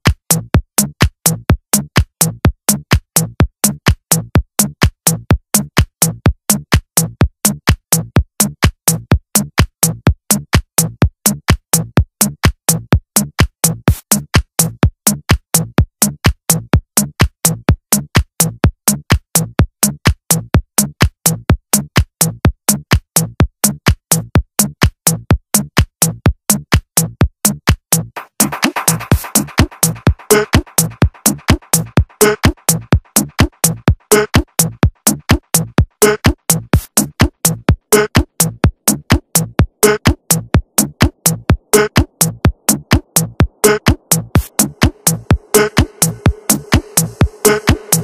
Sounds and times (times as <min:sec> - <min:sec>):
Music: 0:00.0 - 0:48.0.